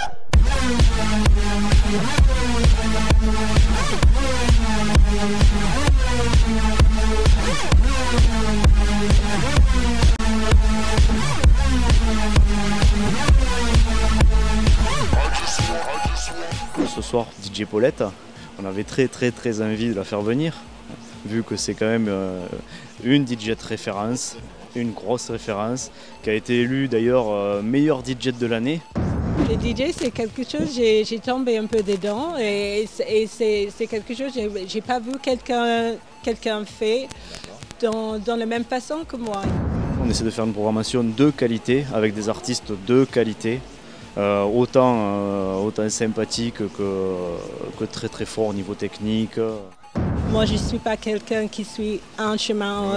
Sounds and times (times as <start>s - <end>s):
Music: 0.0s - 52.9s
Speech: 15.0s - 28.8s, 29.4s - 49.7s, 50.3s - 52.9s.